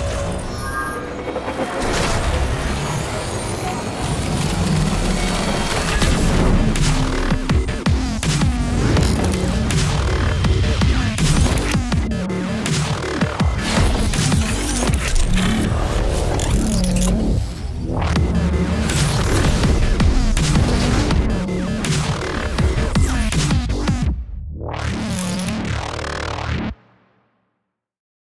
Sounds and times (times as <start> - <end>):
Music: 0.0 - 28.0.